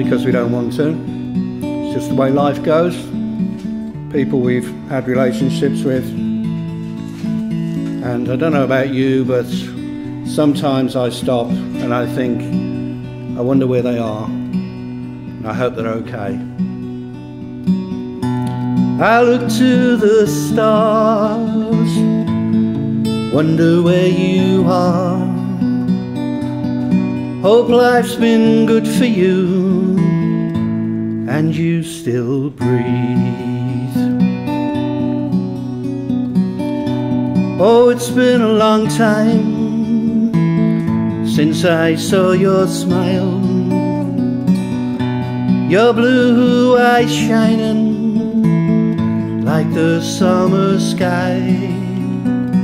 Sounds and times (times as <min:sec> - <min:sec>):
Speech: 0:00.0 - 0:01.0, 0:01.9 - 0:03.1, 0:04.2 - 0:06.2, 0:08.0 - 0:09.7, 0:10.3 - 0:12.5, 0:13.4 - 0:14.4, 0:15.4 - 0:16.5
Music: 0:00.0 - 0:52.6.